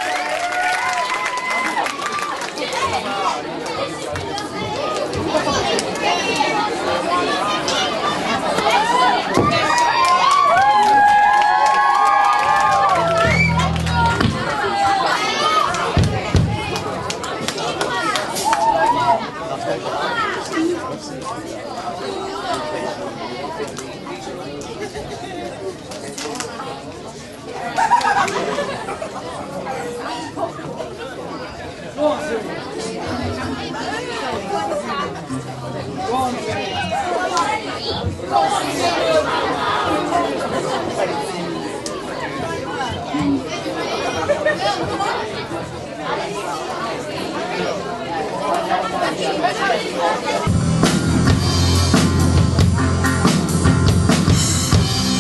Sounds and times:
Cheering: 0.0s - 3.5s, 8.4s - 19.4s
Crowd: 0.0s - 55.2s
Hubbub, speech noise, speech babble: 0.0s - 55.2s
Speech: 1.4s - 11.6s, 12.7s - 50.8s
Music: 12.5s - 14.6s, 35.3s - 36.1s, 50.5s - 55.2s.

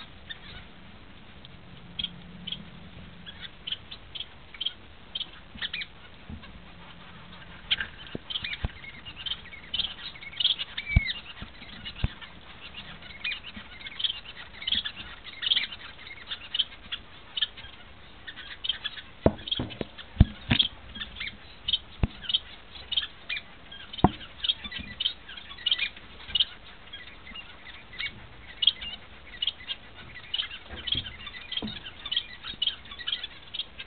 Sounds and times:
Bird: 0.0s - 33.8s
Domestic animals, pets: 0.0s - 33.8s.

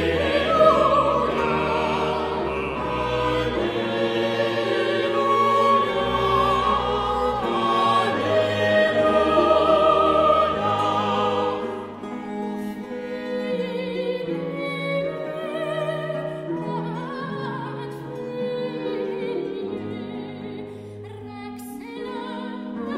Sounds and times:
Music: 0.0s - 22.9s.

